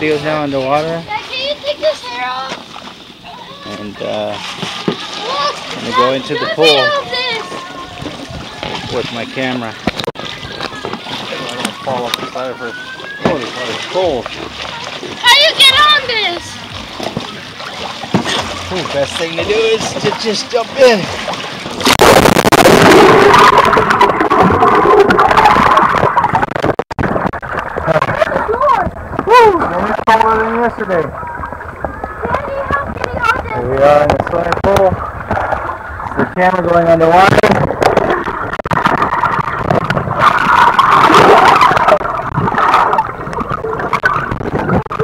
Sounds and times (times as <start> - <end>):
Splash, splatter: 13.1 - 15.3, 16.8 - 30.6, 37.2 - 45.0.